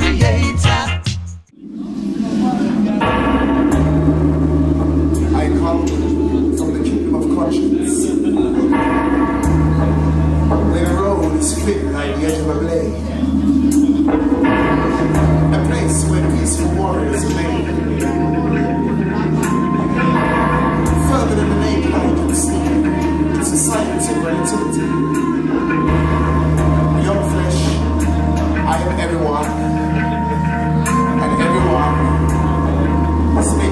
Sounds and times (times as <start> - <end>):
Music: 0.0 - 33.7
Speech: 5.2 - 8.9, 10.5 - 13.2, 15.4 - 18.6, 20.9 - 25.0, 26.9 - 28.0, 28.6 - 29.8, 30.9 - 32.7, 33.4 - 33.7.